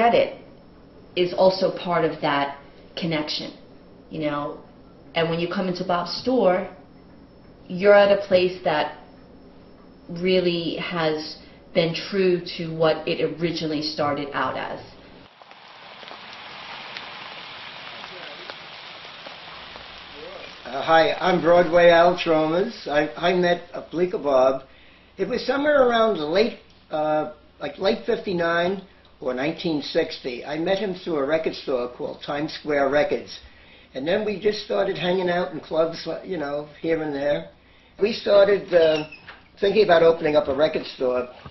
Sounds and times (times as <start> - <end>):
Speech: 10.1 - 14.9, 20.2 - 24.6, 25.2 - 33.4, 34.0 - 41.4.